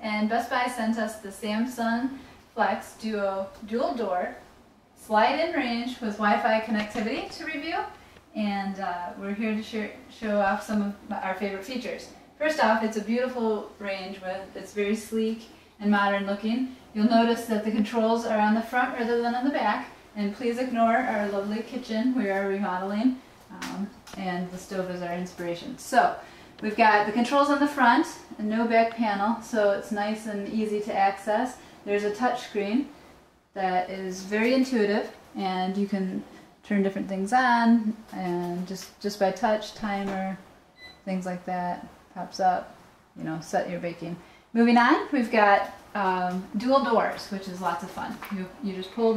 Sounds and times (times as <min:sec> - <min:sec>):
Speech: 0:00.0 - 0:32.9, 0:33.6 - 0:49.1.